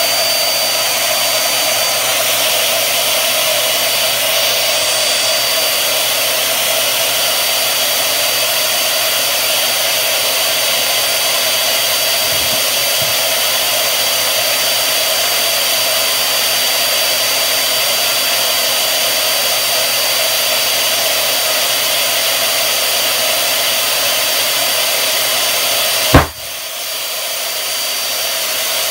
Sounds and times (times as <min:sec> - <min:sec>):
Burst, pop: 0:26.1 - 0:26.6.